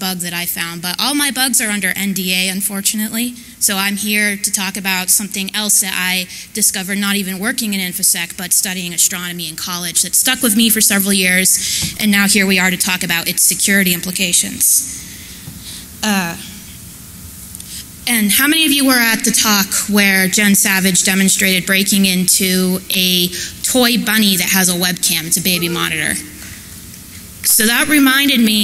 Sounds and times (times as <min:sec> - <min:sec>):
Speech: 0:00.0 - 0:14.9, 0:16.0 - 0:16.6, 0:18.1 - 0:26.3, 0:27.5 - 0:28.6.